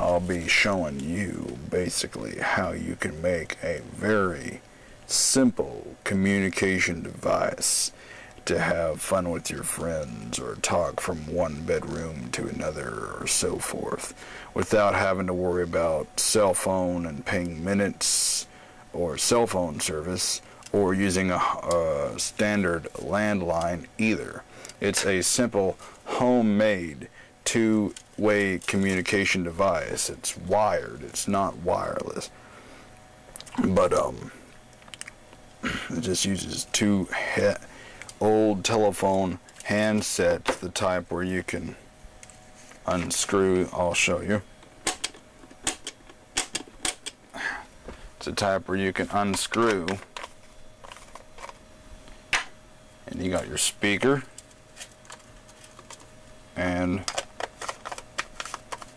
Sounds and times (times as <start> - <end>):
Speech: 0.0 - 32.3, 33.5 - 34.4, 35.7 - 41.8, 42.8 - 44.5, 48.2 - 50.0, 53.0 - 54.3, 56.6 - 57.2.